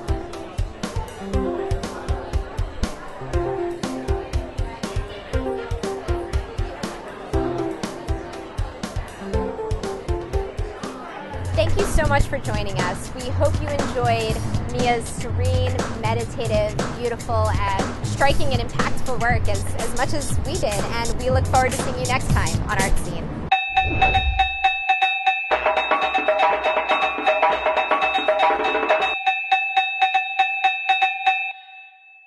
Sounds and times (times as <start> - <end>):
Speech: 10.8 - 23.3
Wood block: 23.8 - 31.6.